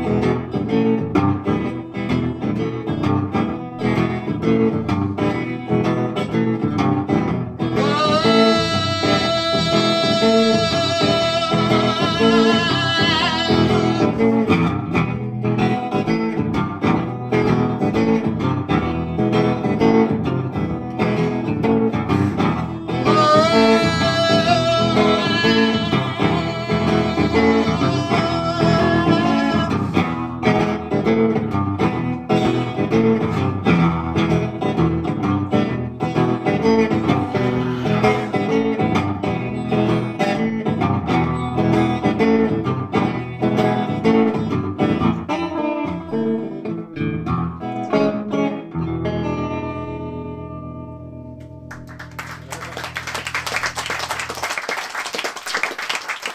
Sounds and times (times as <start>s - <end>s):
Guitar: 0.0s - 56.3s.